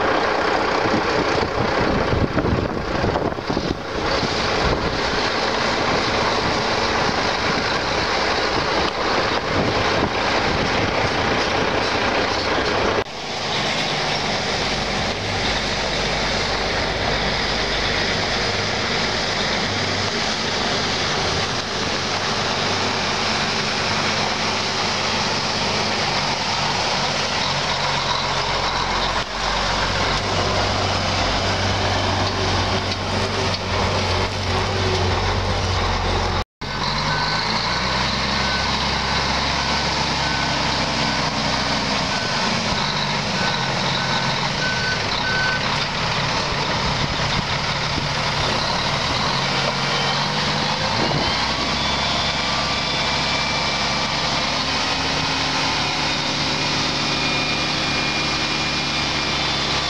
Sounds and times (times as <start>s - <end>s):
Truck: 0.0s - 59.9s.